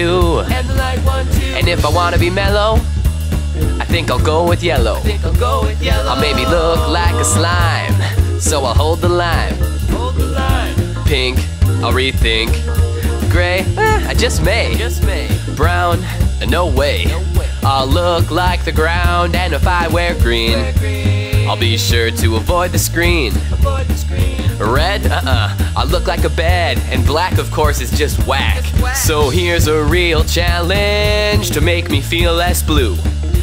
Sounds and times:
Music: 0.0s - 33.4s.

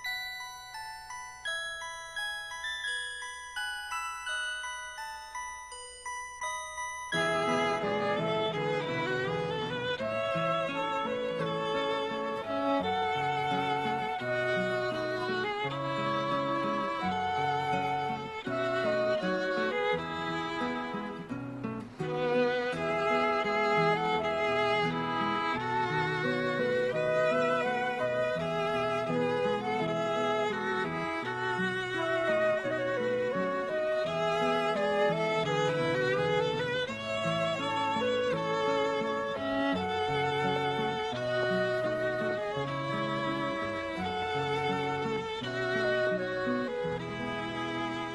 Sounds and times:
Music: 0.0s - 48.1s.

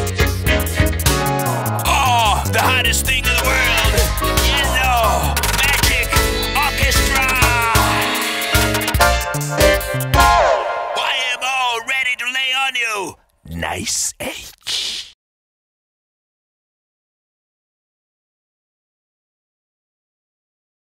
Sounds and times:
Music: 0.0s - 11.8s
Speech: 1.9s - 5.9s, 11.0s - 15.2s.

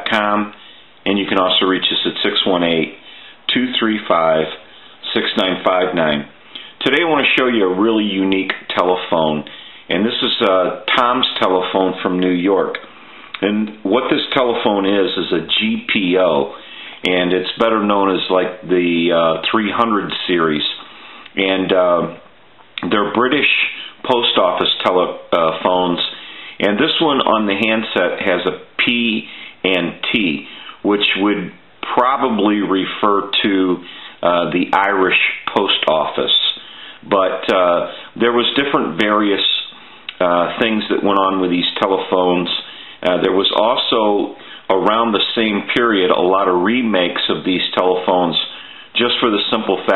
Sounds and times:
Speech: 0.0s - 49.9s.

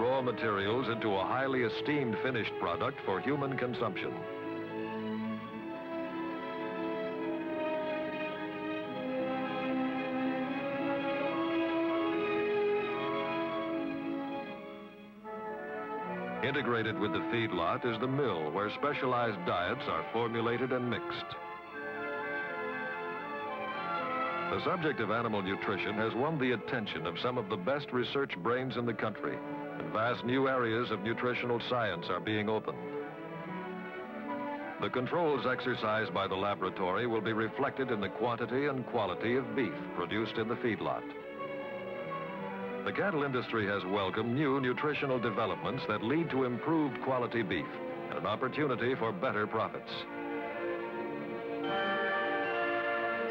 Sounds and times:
Speech: 0.0s - 4.2s, 16.4s - 21.4s, 24.5s - 32.8s, 34.8s - 41.1s, 42.9s - 50.1s
Music: 0.0s - 53.3s.

